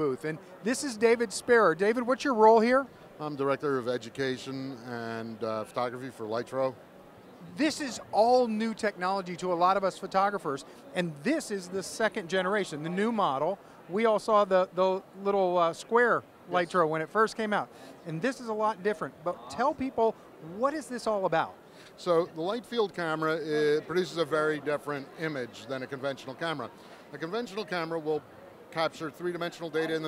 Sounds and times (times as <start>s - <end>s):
Speech: 0.0s - 6.8s, 7.4s - 30.0s.